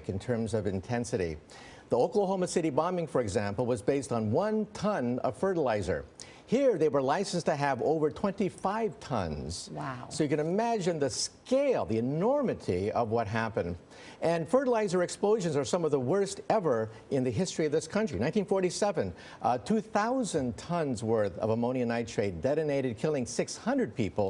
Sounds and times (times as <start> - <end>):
Speech: 0.0 - 24.3.